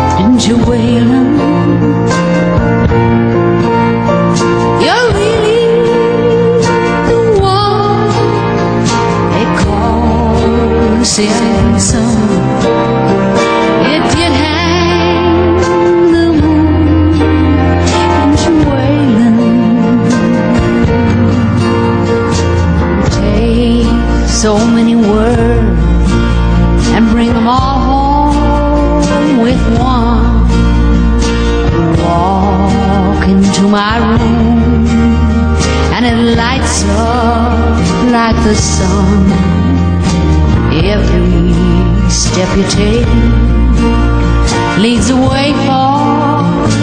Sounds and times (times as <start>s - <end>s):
Music: 0.0s - 46.8s.